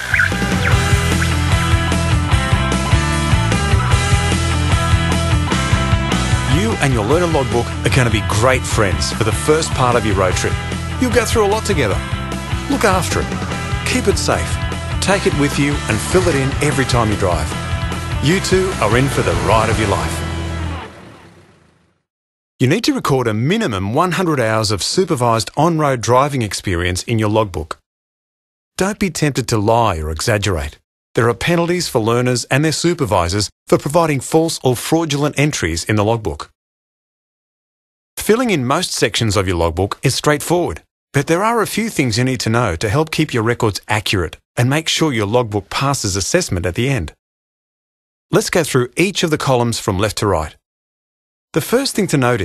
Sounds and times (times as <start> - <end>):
Speech: 6.5 - 12.1, 12.7 - 17.6, 18.2 - 20.2, 22.6 - 27.8, 28.8 - 36.6, 38.2 - 47.2, 48.3 - 50.6, 51.6 - 52.4.